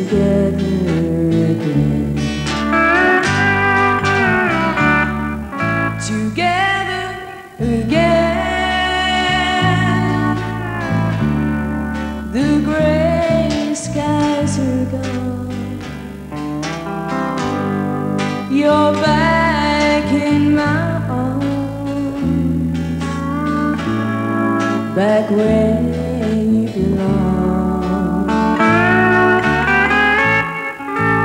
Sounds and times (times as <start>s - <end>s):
Steel guitar, slide guitar: 0.0s - 31.2s.